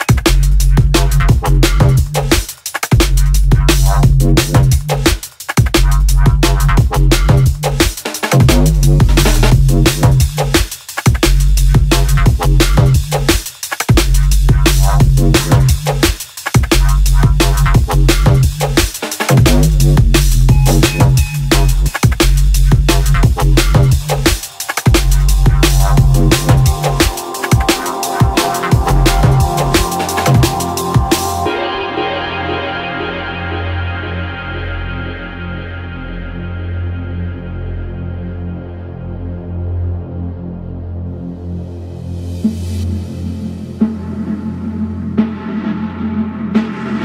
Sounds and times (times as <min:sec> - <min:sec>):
Ambient music: 0:22.9 - 0:47.0.